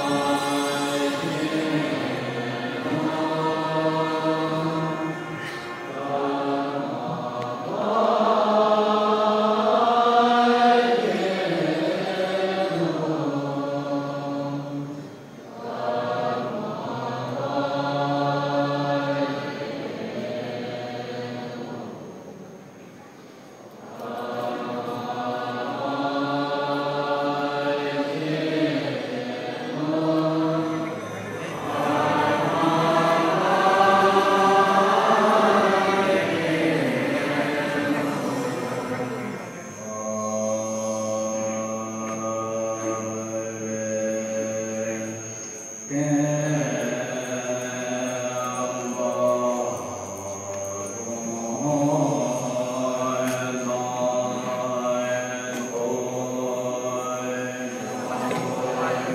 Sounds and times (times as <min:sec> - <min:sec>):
Chant: 0:00.0 - 0:59.1.